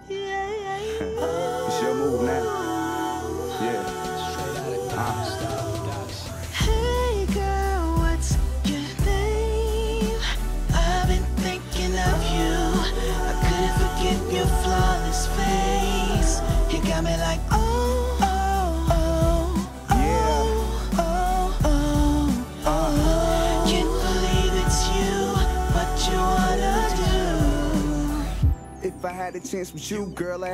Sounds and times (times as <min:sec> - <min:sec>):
Jazz: 0:00.0 - 0:30.5
Pop music: 0:00.0 - 0:30.5
Soundtrack music: 0:00.3 - 0:30.5.